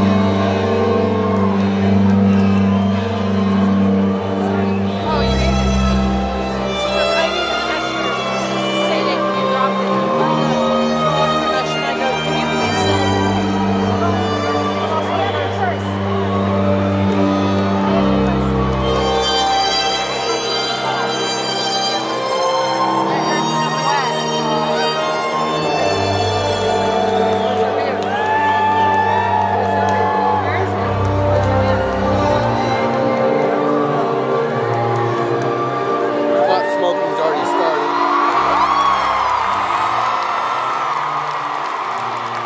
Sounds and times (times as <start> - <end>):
Music: 0.0 - 42.4
Speech: 6.8 - 13.3.